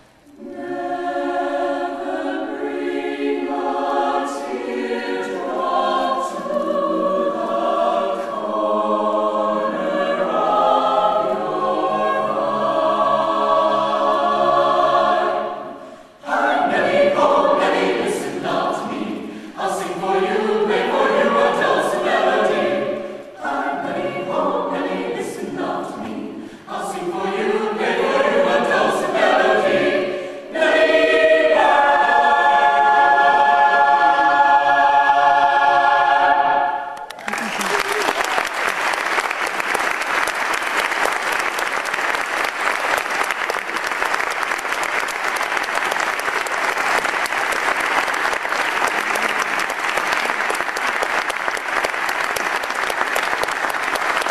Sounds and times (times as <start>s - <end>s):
Crowd: 36.8s - 54.3s
Applause: 37.0s - 54.3s.